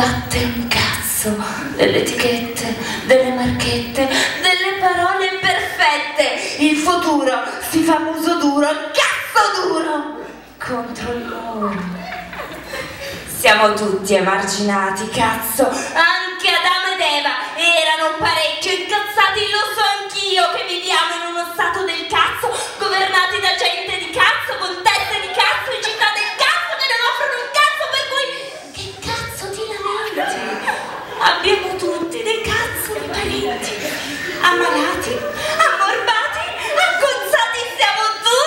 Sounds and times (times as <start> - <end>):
Speech: 0.0 - 12.3, 13.3 - 38.4.